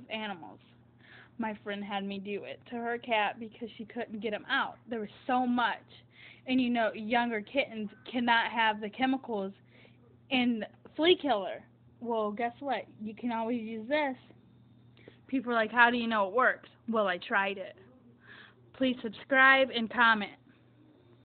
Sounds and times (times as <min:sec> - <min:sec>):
Speech: 0:00.0 - 0:00.6, 0:01.4 - 0:09.6, 0:10.3 - 0:14.3, 0:15.3 - 0:18.0, 0:18.8 - 0:20.4.